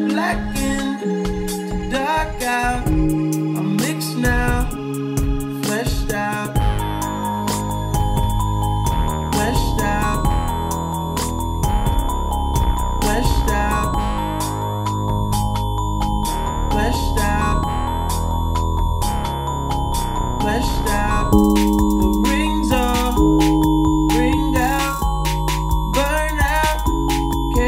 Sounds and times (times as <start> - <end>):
Music: 0.0 - 27.6.